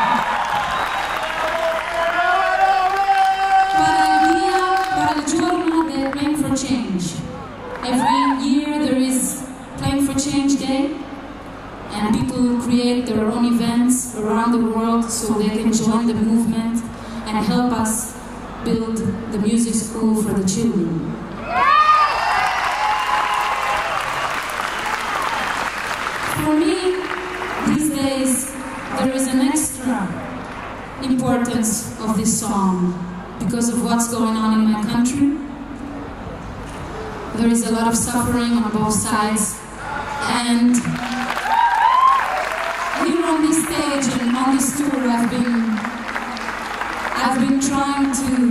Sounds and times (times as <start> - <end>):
Applause: 0.0 - 6.5, 22.0 - 28.0, 40.8 - 48.5.